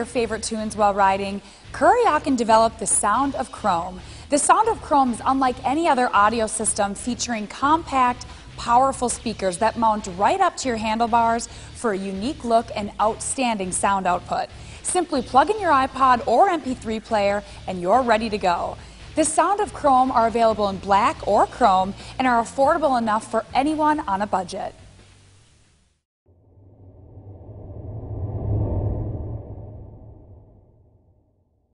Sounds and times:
Speech: 0:00.0 - 0:24.8
Music: 0:00.0 - 0:26.0.

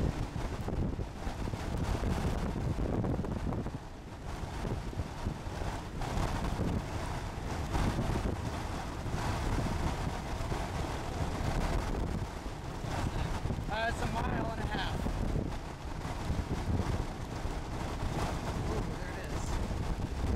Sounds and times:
Outside, rural or natural: 0:00.0 - 0:20.3
Speech: 0:13.7 - 0:15.0, 0:18.7 - 0:19.6.

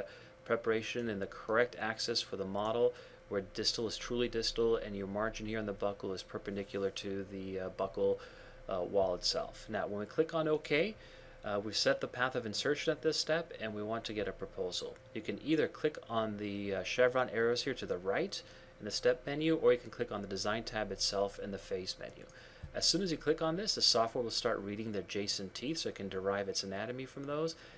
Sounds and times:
Speech: 0:00.0 - 0:27.6.

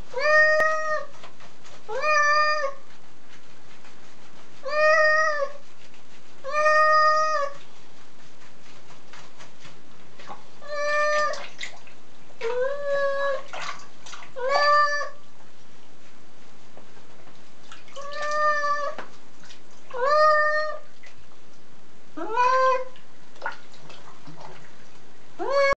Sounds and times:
Caterwaul: 0:00.2 - 0:01.1, 0:06.5 - 0:07.6, 0:10.6 - 0:11.5, 0:14.4 - 0:15.2, 0:20.0 - 0:20.8, 0:22.2 - 0:22.9, 0:25.4 - 0:25.7.

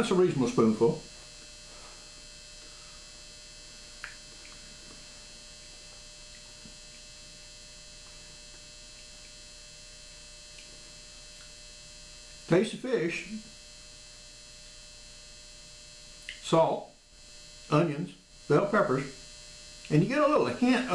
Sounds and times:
Electric shaver, electric razor: 0:00.0 - 0:16.4, 0:17.1 - 0:20.9.

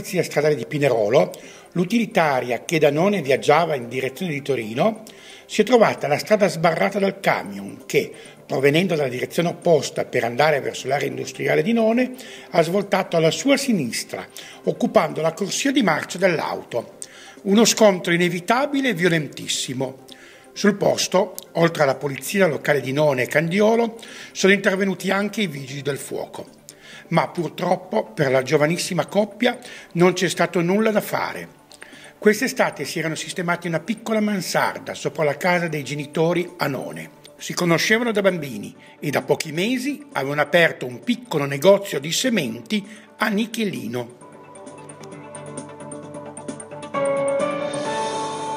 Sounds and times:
Speech: 0:00.0 - 0:20.0, 0:20.6 - 0:26.5, 0:27.1 - 0:31.5, 0:32.2 - 0:44.2.

